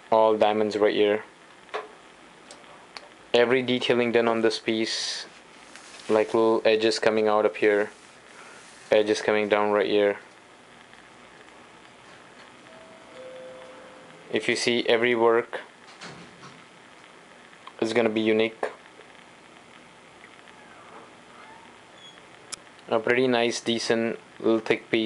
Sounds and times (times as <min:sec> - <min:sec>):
Speech: 0:00.1 - 0:01.3, 0:03.3 - 0:05.4, 0:06.1 - 0:08.0, 0:08.9 - 0:10.3, 0:14.3 - 0:15.7, 0:17.7 - 0:18.8, 0:22.9 - 0:25.0.